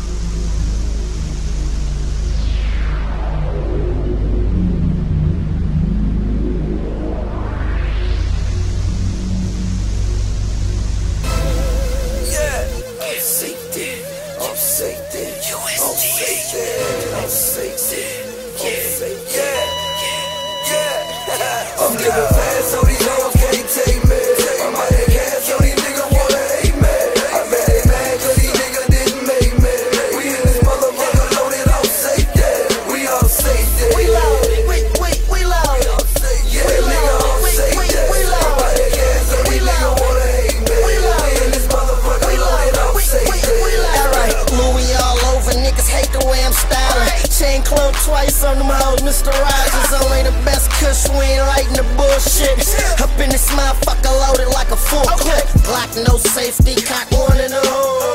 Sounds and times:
Music: 0.0s - 58.1s
Singing: 11.2s - 58.1s.

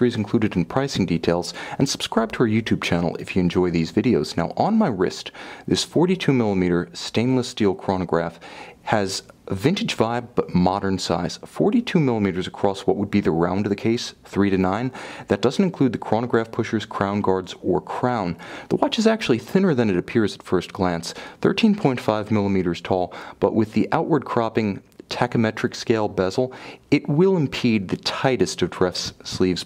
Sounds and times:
Speech: 0.0s - 29.6s.

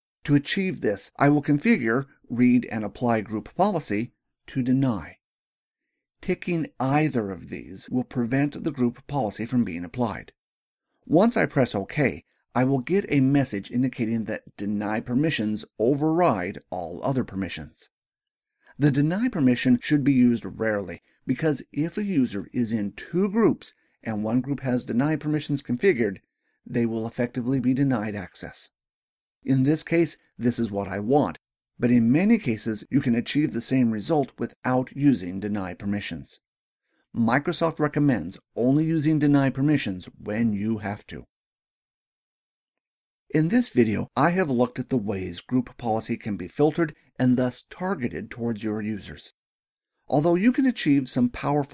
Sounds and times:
Speech: 0.2s - 5.2s, 6.2s - 10.4s, 11.1s - 17.9s, 18.8s - 28.7s, 29.4s - 36.4s, 37.2s - 41.3s, 43.3s - 49.4s, 50.1s - 51.7s.

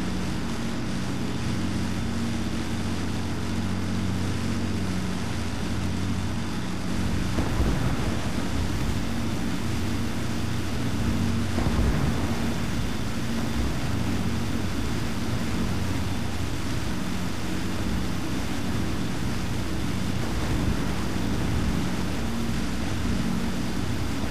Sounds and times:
White noise: 0.0s - 24.3s.

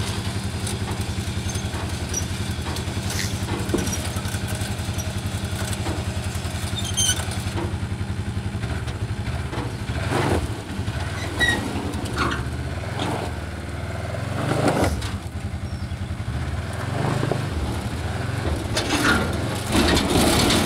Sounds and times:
Car: 0.0s - 20.6s.

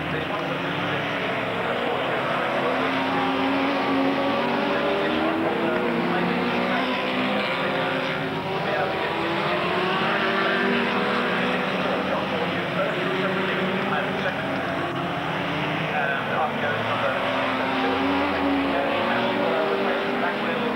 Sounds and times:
Speech: 0.0s - 15.0s, 15.8s - 20.7s
Race car, auto racing: 0.0s - 20.7s.

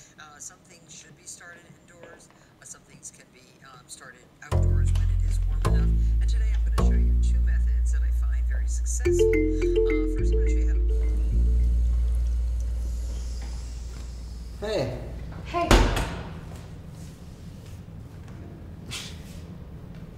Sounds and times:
Speech: 0.0s - 9.1s.

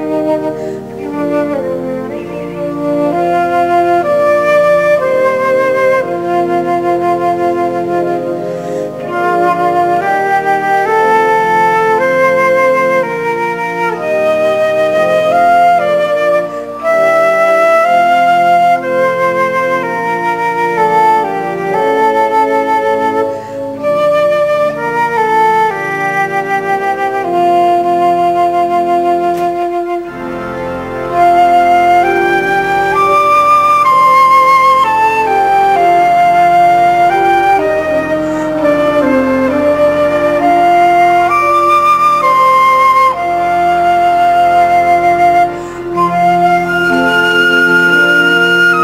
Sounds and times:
Flute: 0.0s - 48.8s.

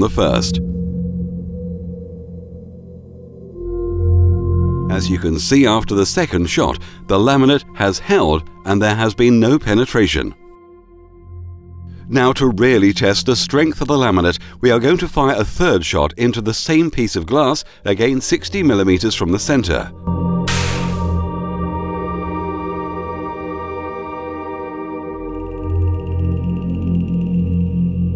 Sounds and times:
Speech: 0.0s - 0.6s, 4.9s - 10.4s, 12.1s - 19.9s.

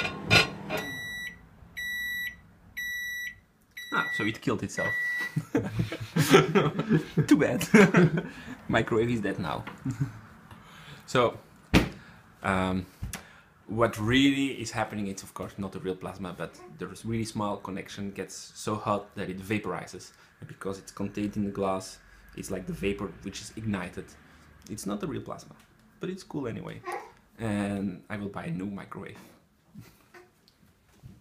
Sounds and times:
Speech: 3.9s - 5.0s, 7.2s - 7.8s, 8.7s - 9.7s, 12.4s - 12.9s, 13.7s - 29.4s.

